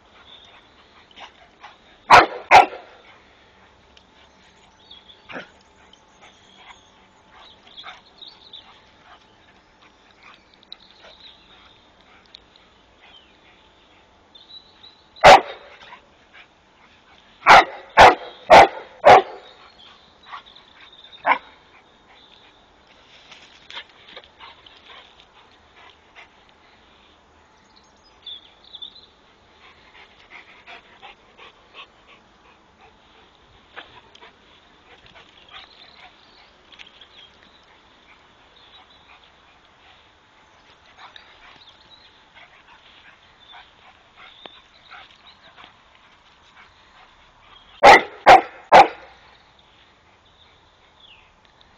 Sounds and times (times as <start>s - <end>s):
Bark: 2.1s - 3.0s, 15.2s - 15.7s, 17.4s - 19.5s, 47.8s - 49.1s.